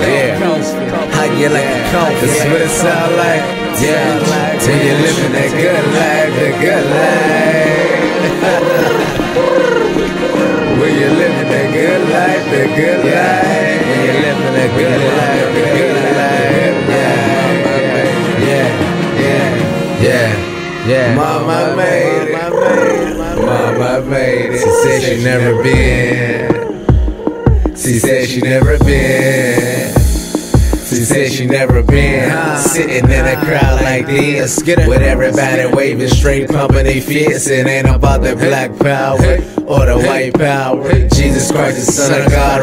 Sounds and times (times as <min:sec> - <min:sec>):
Background music: 0:00.0 - 0:42.6.